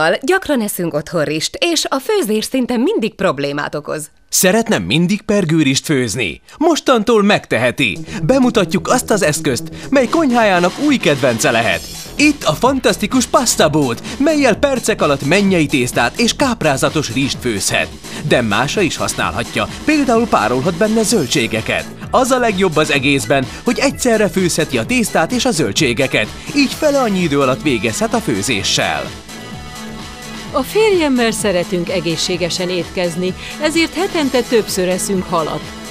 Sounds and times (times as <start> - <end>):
Speech: 0.0 - 29.1, 30.5 - 35.6
Music: 5.7 - 35.9.